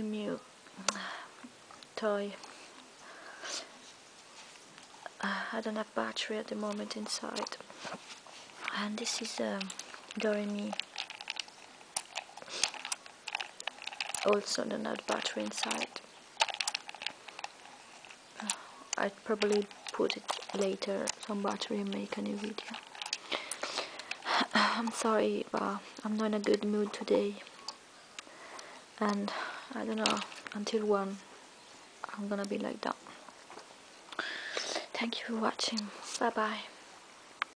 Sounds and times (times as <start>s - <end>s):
Speech: 0.0s - 0.4s, 5.5s - 7.6s, 8.7s - 10.8s, 14.2s - 16.0s, 18.4s - 22.8s, 24.8s - 27.4s, 29.0s - 31.2s, 32.1s - 33.0s, 34.9s - 36.8s.